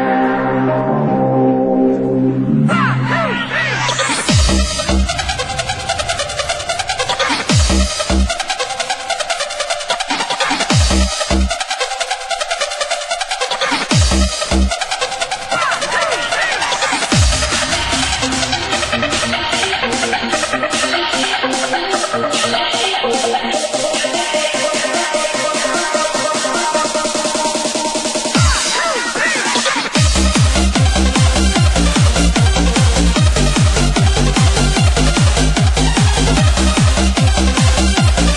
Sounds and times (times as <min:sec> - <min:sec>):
Music: 0:00.0 - 0:38.3.